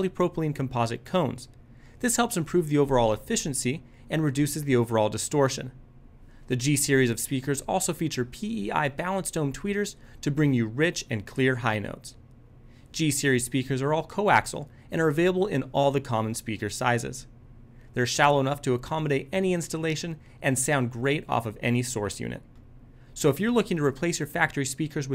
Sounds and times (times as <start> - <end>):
Speech: 0.0 - 5.8, 6.5 - 12.2, 12.9 - 17.3, 18.0 - 22.5, 23.2 - 25.1.